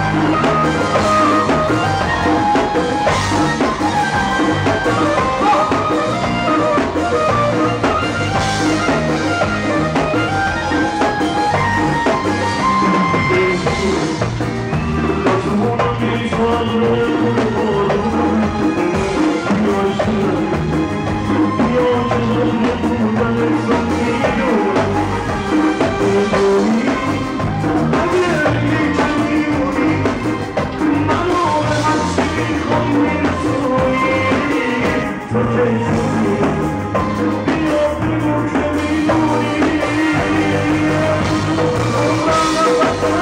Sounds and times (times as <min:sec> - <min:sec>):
Music: 0:00.0 - 0:43.2.